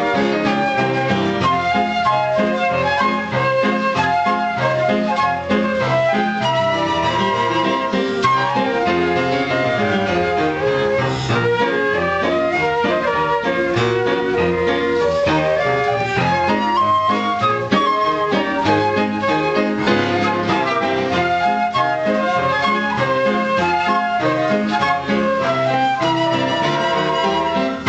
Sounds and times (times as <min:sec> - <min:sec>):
Flute: 0:00.0 - 0:27.8.